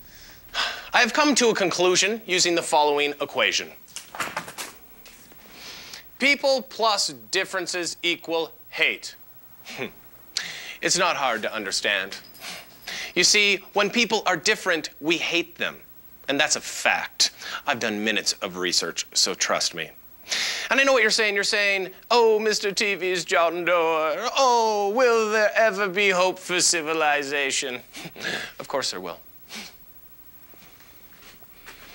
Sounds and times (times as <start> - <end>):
Speech: 0.9 - 3.8, 6.2 - 9.2, 10.8 - 12.2, 13.2 - 20.0, 20.7 - 27.9, 28.6 - 29.3.